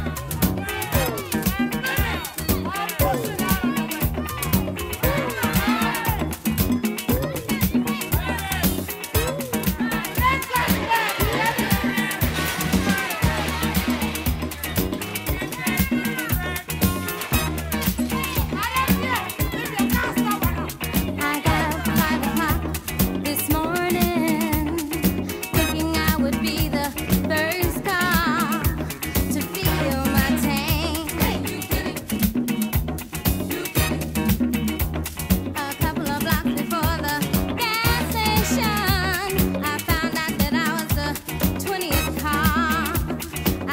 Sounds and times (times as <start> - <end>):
Drum: 0.0 - 43.7
Drum kit: 0.0 - 43.7
Salsa music: 0.0 - 43.7.